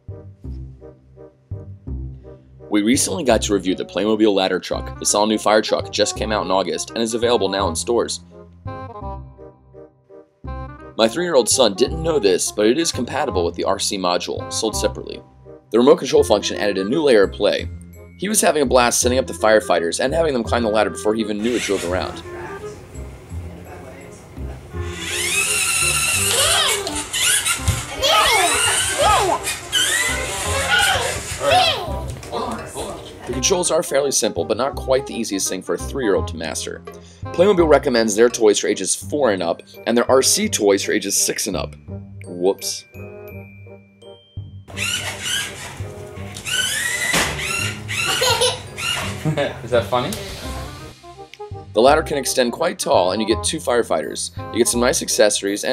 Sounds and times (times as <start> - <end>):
Music: 0.0 - 55.7
Speech: 2.7 - 8.2, 11.0 - 15.2, 15.8 - 22.3, 32.4 - 36.8, 37.4 - 42.9, 51.8 - 55.7.